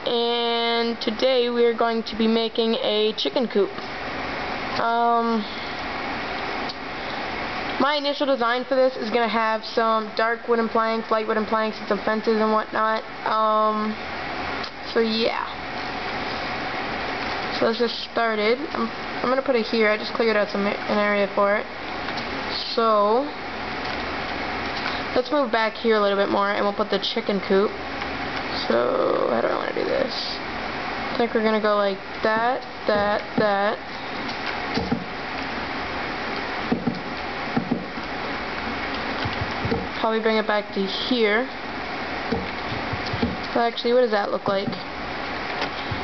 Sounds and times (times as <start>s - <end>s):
Speech: 0.0s - 3.8s, 4.8s - 5.5s, 7.8s - 14.0s, 14.9s - 15.6s, 17.6s - 21.7s, 22.5s - 23.4s, 25.2s - 27.8s, 28.5s - 30.4s, 31.2s - 33.8s, 40.0s - 41.6s, 43.5s - 44.9s.